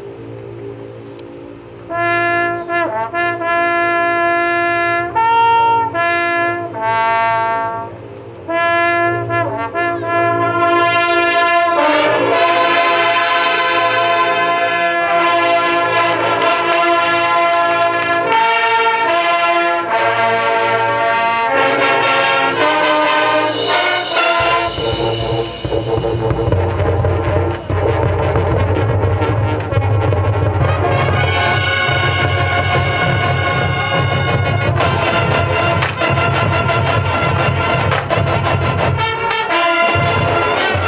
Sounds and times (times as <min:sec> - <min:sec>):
Music: 0:00.0 - 0:40.8
Outside, urban or manmade: 0:00.0 - 0:40.8.